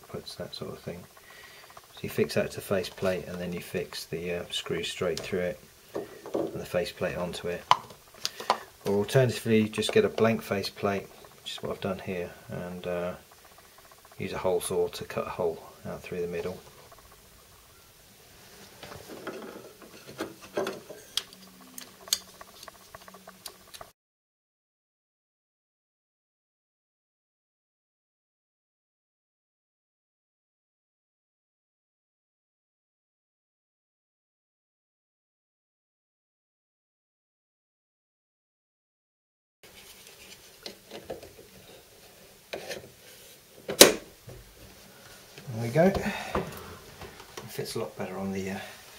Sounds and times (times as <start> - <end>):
Speech: 0.0 - 1.1, 1.9 - 5.6, 6.5 - 7.7, 8.8 - 13.2, 14.2 - 16.6, 45.4 - 46.2, 47.4 - 48.8.